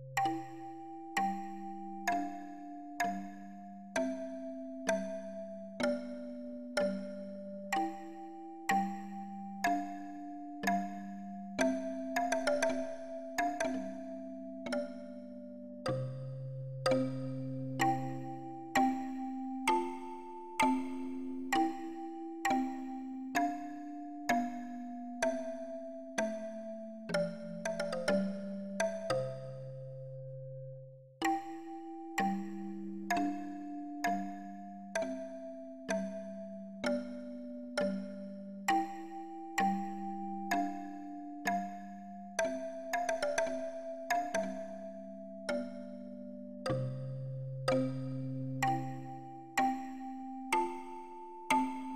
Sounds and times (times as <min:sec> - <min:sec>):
Music: 0:00.0 - 0:51.9.